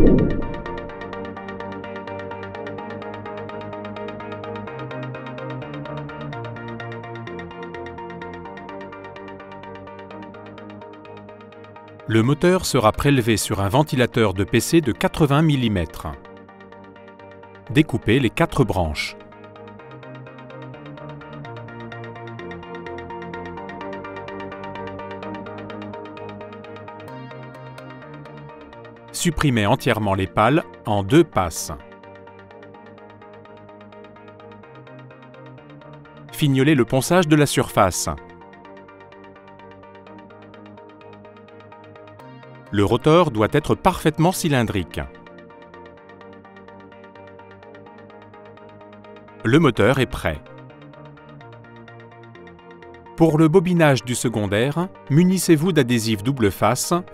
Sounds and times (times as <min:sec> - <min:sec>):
Music: 0:00.0 - 0:57.1
Speech: 0:12.1 - 0:16.2, 0:17.7 - 0:19.2, 0:29.2 - 0:31.8, 0:36.3 - 0:38.2, 0:42.7 - 0:45.1, 0:49.5 - 0:50.4, 0:53.2 - 0:57.1.